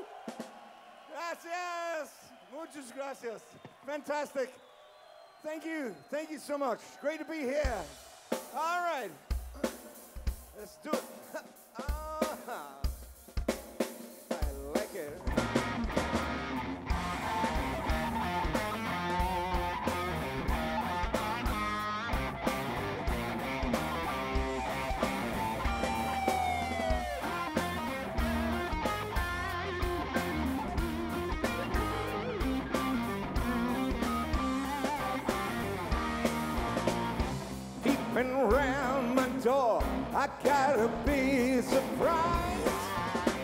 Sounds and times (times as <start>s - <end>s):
Musical instrument: 15.3s - 43.4s.